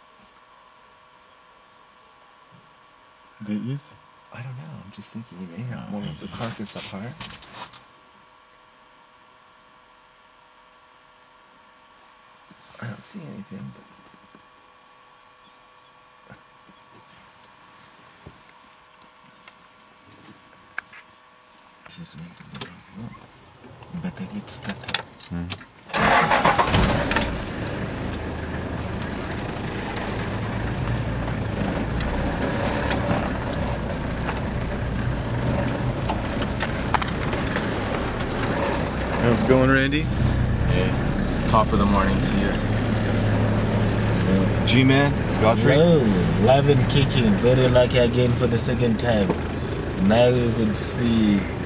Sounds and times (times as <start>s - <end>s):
Speech: 3.4s - 7.2s, 12.8s - 14.0s, 21.8s - 23.2s, 23.9s - 25.6s, 39.2s - 40.1s, 40.7s - 42.6s, 44.3s - 49.4s, 50.0s - 51.6s.